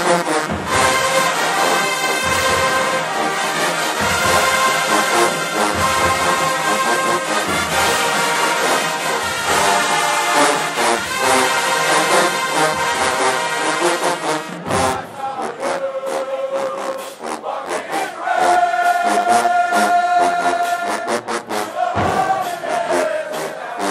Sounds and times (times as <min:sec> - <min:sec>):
Music: 0:00.0 - 0:23.9.